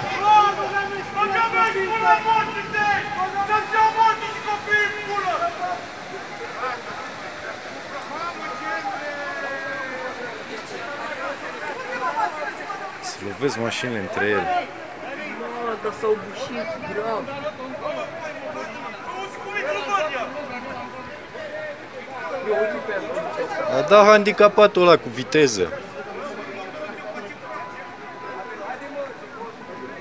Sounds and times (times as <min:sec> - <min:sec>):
Speech: 0:06.4 - 0:30.0.